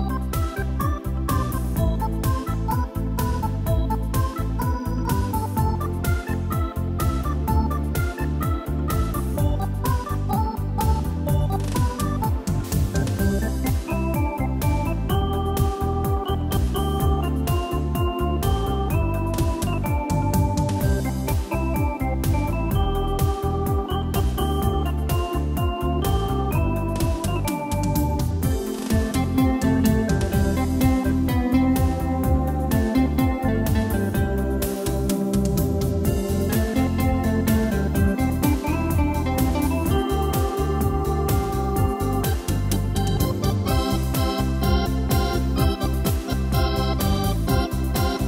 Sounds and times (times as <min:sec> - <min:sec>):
Music: 0:00.0 - 0:48.2.